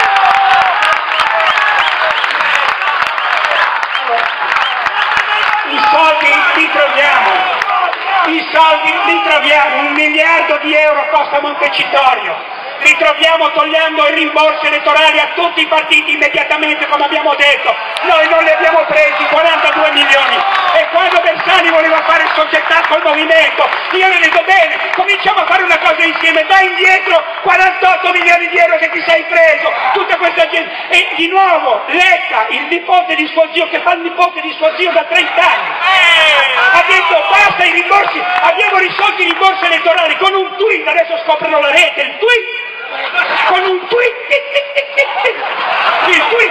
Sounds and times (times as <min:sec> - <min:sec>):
Speech: 0:05.6 - 0:07.6, 0:08.2 - 0:45.4, 0:46.0 - 0:46.5.